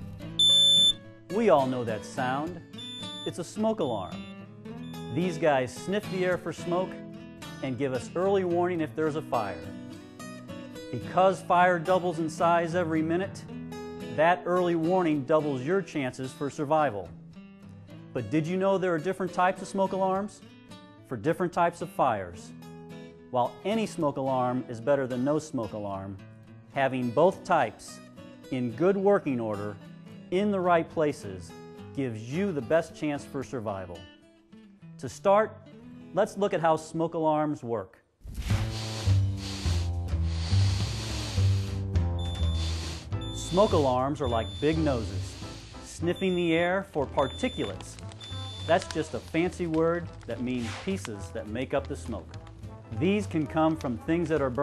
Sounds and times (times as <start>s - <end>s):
Music: 0.0s - 54.6s
Speech: 1.3s - 2.6s, 3.3s - 4.1s, 5.1s - 7.0s, 7.6s - 9.6s, 11.0s - 13.4s, 14.2s - 17.1s, 18.2s - 20.4s, 21.1s - 22.5s, 23.4s - 26.2s, 26.8s - 34.0s, 35.0s - 35.6s, 36.2s - 38.0s, 43.4s - 45.3s, 45.9s - 48.0s, 48.7s - 52.3s, 52.9s - 54.6s.